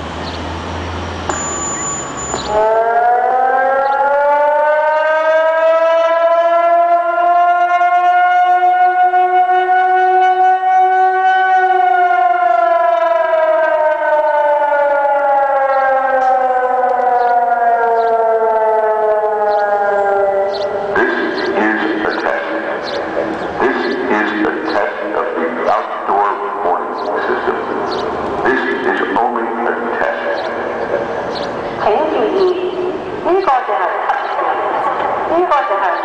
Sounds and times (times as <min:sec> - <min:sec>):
Speech: 0:21.0 - 0:27.7, 0:28.5 - 0:31.0, 0:31.8 - 0:36.0.